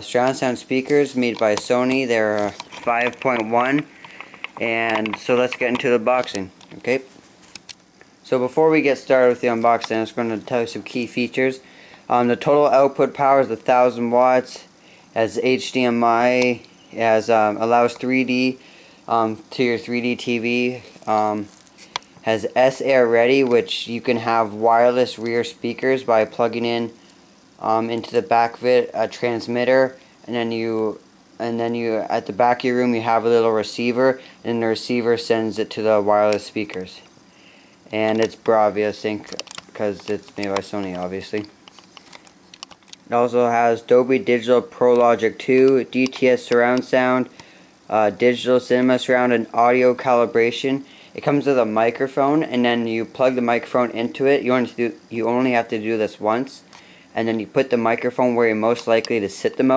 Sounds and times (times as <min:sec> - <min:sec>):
Speech: 0:00.0 - 0:03.9, 0:04.6 - 0:07.1, 0:08.2 - 0:21.5, 0:22.2 - 0:27.0, 0:27.6 - 0:37.1, 0:37.9 - 0:41.5, 0:43.1 - 0:47.3, 0:47.9 - 0:59.7.